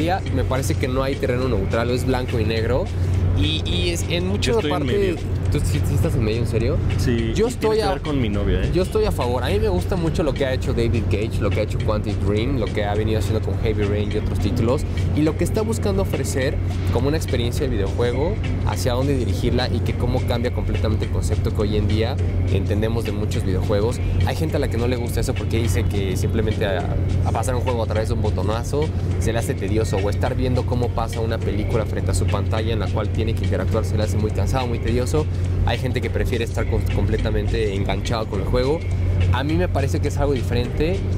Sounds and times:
Speech: 0.0s - 41.0s
Music: 0.0s - 41.1s.

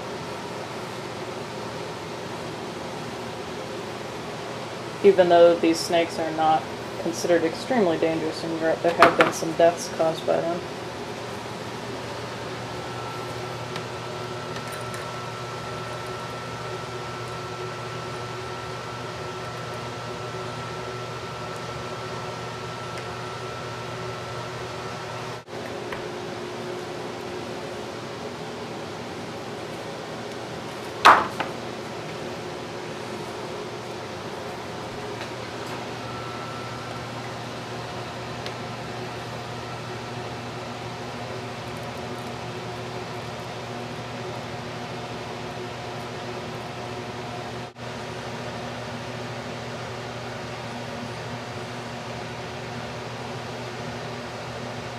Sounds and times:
Speech: 5.0s - 10.7s.

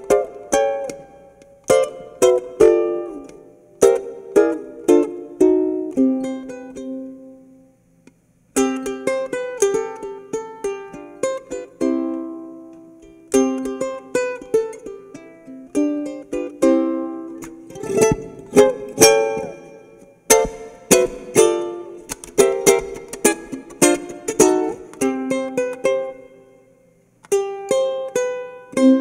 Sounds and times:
Inside, small room: 0.0s - 29.0s
Ukulele: 0.0s - 29.0s.

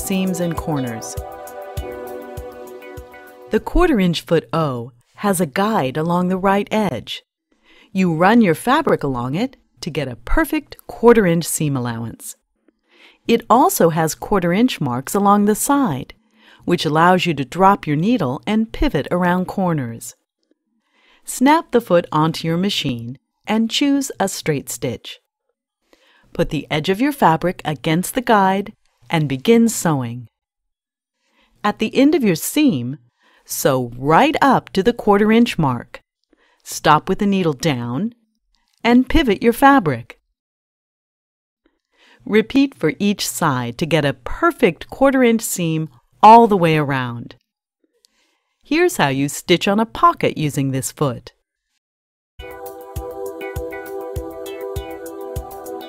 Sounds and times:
Speech: 0.0s - 1.2s, 3.5s - 7.2s, 8.0s - 12.4s, 13.3s - 20.2s, 21.3s - 25.2s, 26.4s - 30.3s, 31.7s - 36.0s, 36.7s - 38.2s, 38.8s - 40.2s, 42.2s - 47.4s, 48.7s - 51.4s.

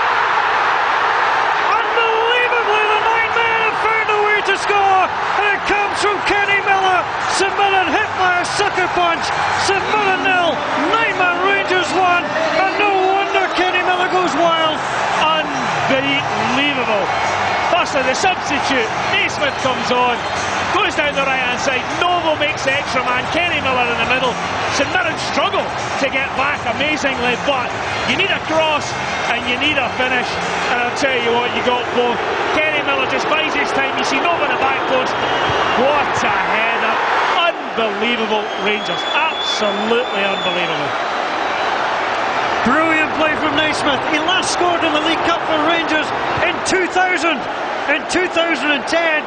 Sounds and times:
Speech: 1.7s - 17.1s, 17.7s - 35.2s, 35.8s - 40.9s, 42.6s - 49.2s.

